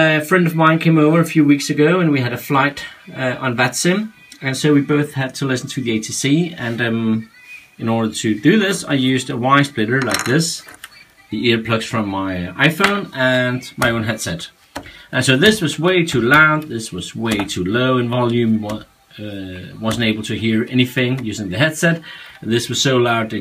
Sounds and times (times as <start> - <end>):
Speech: 0.0 - 14.5, 15.2 - 23.4
Music: 0.0 - 23.4.